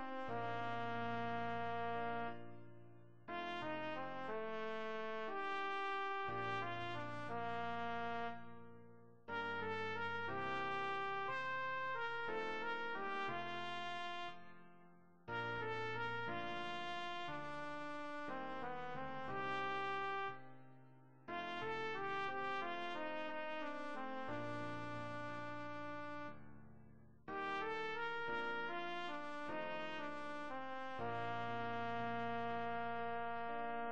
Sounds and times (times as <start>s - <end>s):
Trumpet: 0.0s - 14.7s, 15.3s - 20.6s, 21.3s - 26.4s, 27.3s - 33.9s.